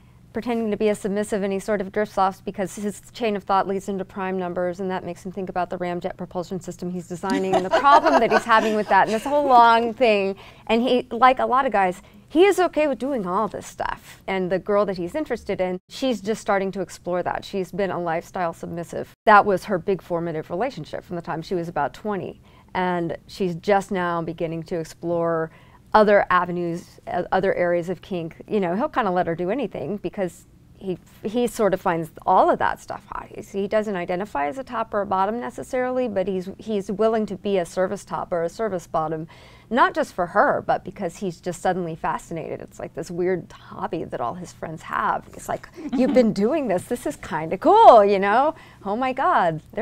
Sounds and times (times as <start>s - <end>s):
Speech: 0.4s - 49.8s.